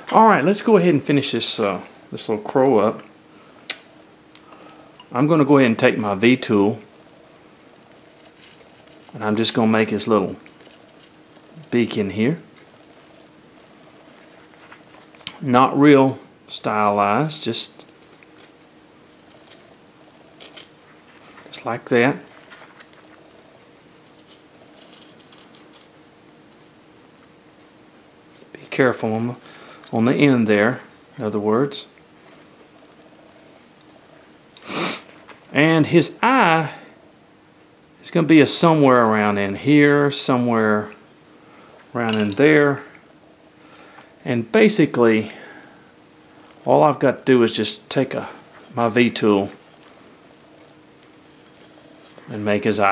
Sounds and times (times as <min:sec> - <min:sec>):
Speech: 0:00.1 - 0:03.1, 0:05.1 - 0:06.9, 0:09.2 - 0:10.4, 0:11.6 - 0:12.5, 0:15.4 - 0:17.8, 0:21.5 - 0:22.3, 0:28.5 - 0:32.0, 0:35.5 - 0:36.9, 0:38.0 - 0:41.0, 0:42.0 - 0:42.9, 0:44.2 - 0:45.4, 0:46.6 - 0:49.6, 0:52.3 - 0:52.9.